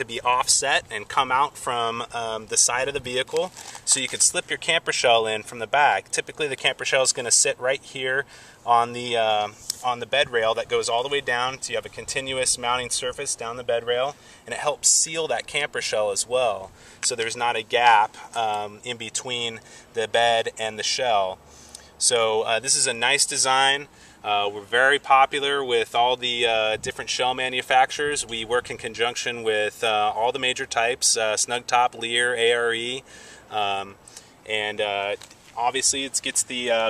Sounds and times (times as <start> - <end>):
Speech: 0.0 - 21.4, 22.0 - 36.9.